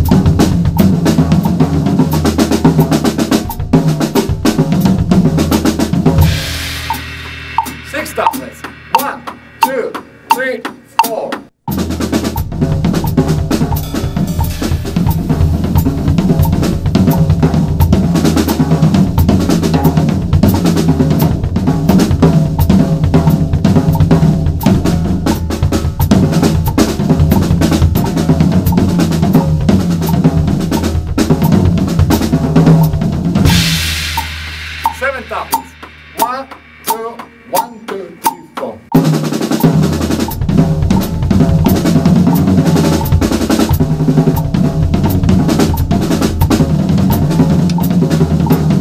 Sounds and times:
Drum: 0.0 - 48.8.

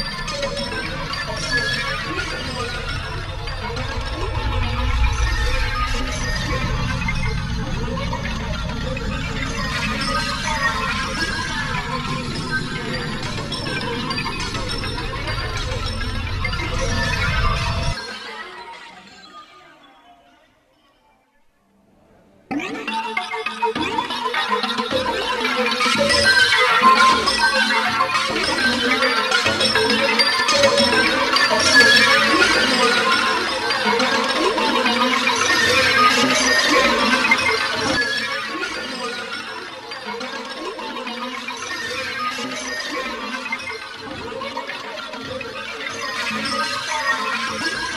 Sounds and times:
Music: 0.0 - 47.9.

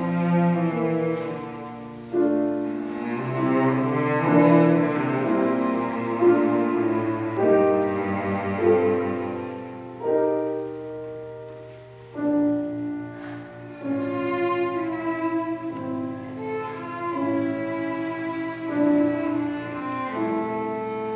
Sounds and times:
Violin, fiddle: 0.0 - 10.8, 12.2 - 21.1
Cello: 0.0 - 21.1.

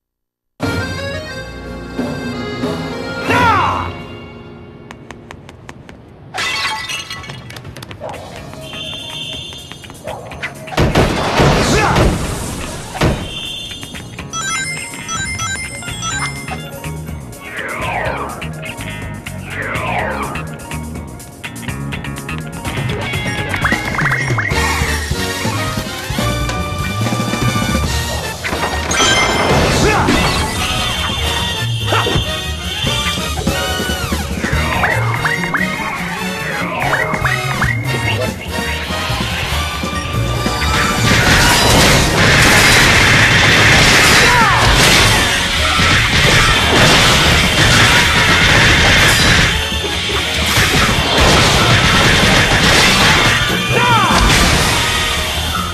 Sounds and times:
Music: 0.6 - 5.3, 8.6 - 55.7.

